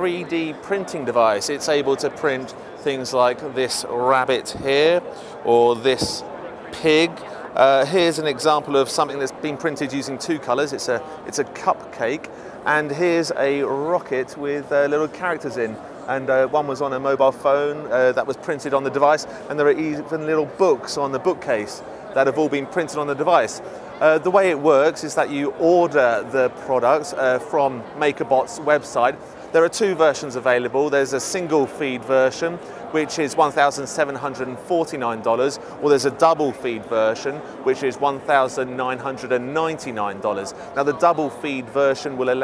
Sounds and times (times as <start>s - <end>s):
Speech: 0.0s - 42.4s.